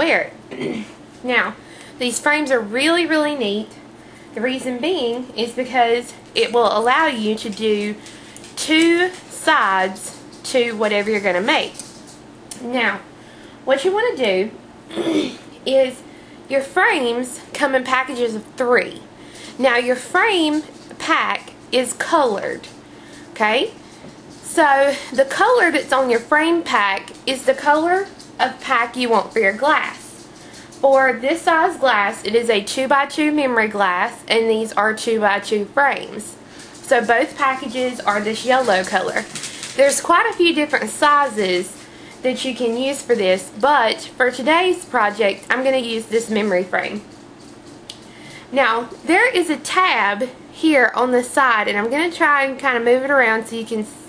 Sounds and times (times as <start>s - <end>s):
Speech: 0.0s - 0.4s, 1.2s - 3.8s, 4.4s - 11.9s, 12.6s - 13.1s, 13.7s - 22.8s, 23.4s - 23.8s, 24.4s - 47.1s, 48.5s - 54.0s.